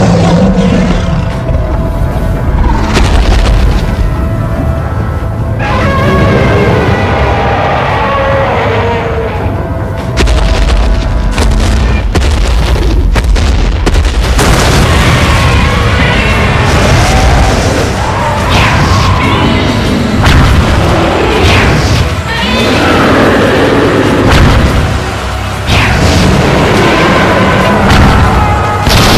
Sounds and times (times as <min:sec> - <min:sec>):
Music: 0:00.0 - 0:29.1.